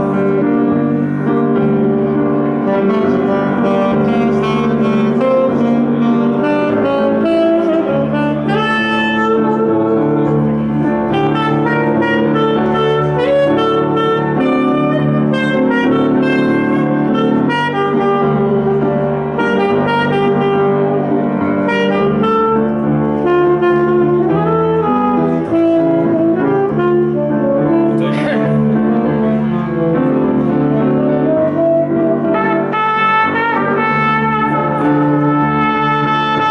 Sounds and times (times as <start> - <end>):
Brass instrument: 0.0 - 36.5
Saxophone: 0.0 - 36.5.